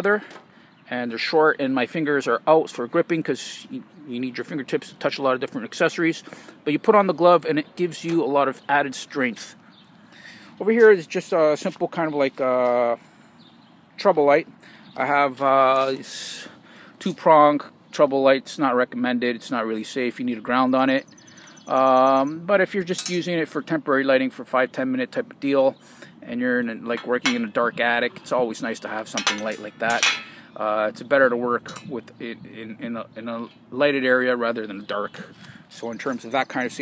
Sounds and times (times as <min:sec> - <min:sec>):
Speech: 0:00.0 - 0:00.3, 0:00.9 - 0:09.6, 0:10.6 - 0:13.0, 0:14.0 - 0:21.1, 0:21.7 - 0:36.8.